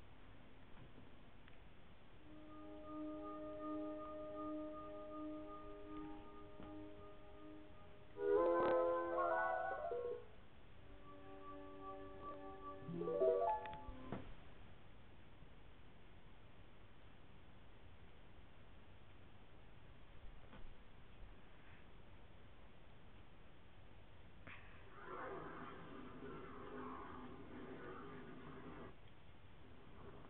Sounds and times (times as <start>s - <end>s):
Silence: 0.0s - 30.2s.